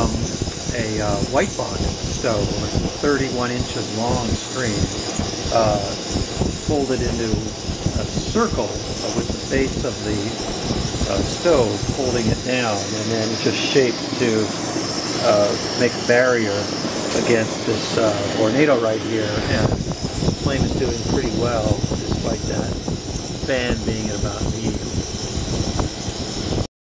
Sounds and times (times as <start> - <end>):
Speech: 0.0 - 5.0, 5.6 - 6.0, 6.6 - 10.4, 11.1 - 14.5, 15.2 - 19.8, 20.4 - 22.8, 23.5 - 24.9
Wind noise (microphone): 0.0 - 26.7.